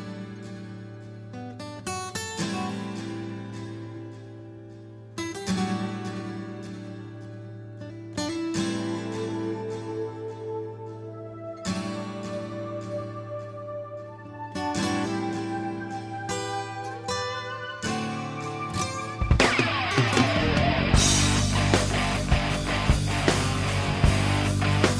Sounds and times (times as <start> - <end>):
Exciting music: 16.0 - 24.9.